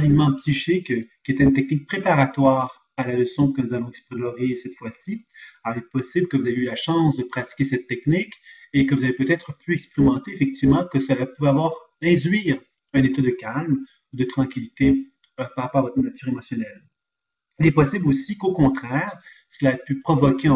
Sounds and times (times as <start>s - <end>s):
Speech: 0.0s - 16.8s, 17.6s - 20.5s.